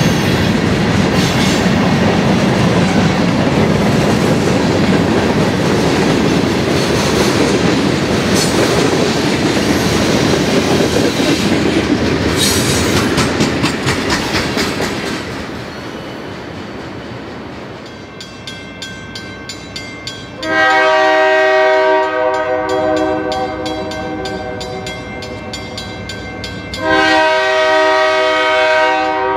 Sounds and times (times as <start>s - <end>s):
Railroad car, train wagon: 0.0s - 29.3s
Train horn: 20.4s - 25.5s, 26.8s - 29.3s.